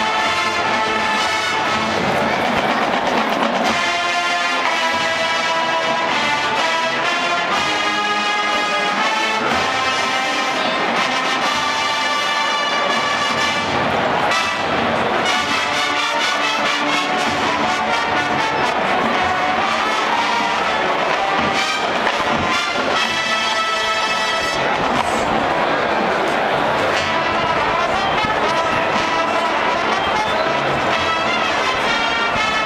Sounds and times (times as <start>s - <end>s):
Music: 0.0s - 32.6s.